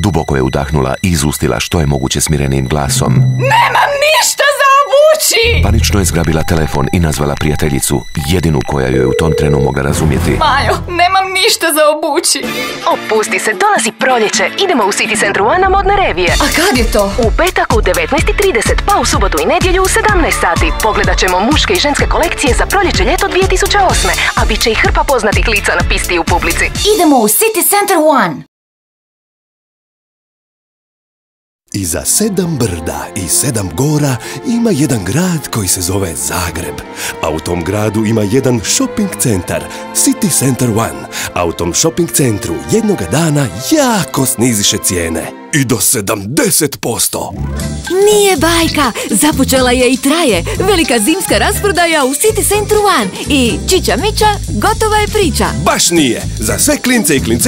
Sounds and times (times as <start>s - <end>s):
Music: 0.0s - 28.4s, 31.7s - 57.4s
Speech: 0.0s - 28.4s, 31.7s - 57.4s.